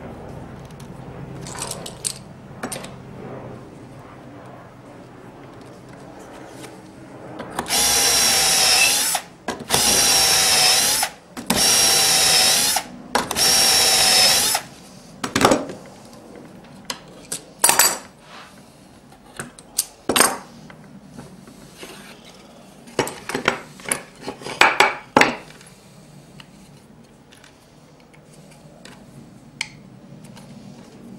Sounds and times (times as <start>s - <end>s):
Drill: 7.6s - 14.7s.